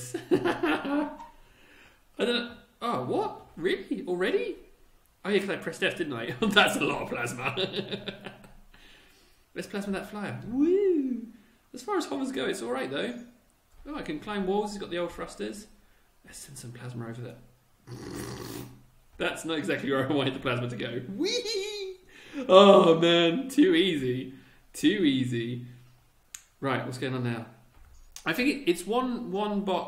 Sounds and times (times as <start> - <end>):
Inside, small room: 0.0 - 29.8
Speech: 2.2 - 7.8, 9.6 - 15.7, 16.3 - 17.4, 19.2 - 25.7, 26.6 - 27.6, 28.2 - 29.8.